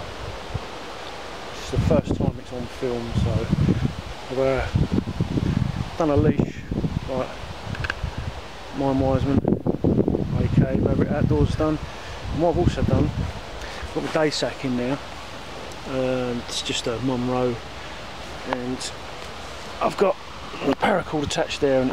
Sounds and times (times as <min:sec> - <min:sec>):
Stream: 0:00.0 - 0:21.9
Speech: 0:01.6 - 0:03.6, 0:04.3 - 0:04.8, 0:06.0 - 0:07.4, 0:08.7 - 0:09.4, 0:10.3 - 0:13.2, 0:13.9 - 0:15.0, 0:15.8 - 0:17.6, 0:18.4 - 0:19.0, 0:19.8 - 0:21.9.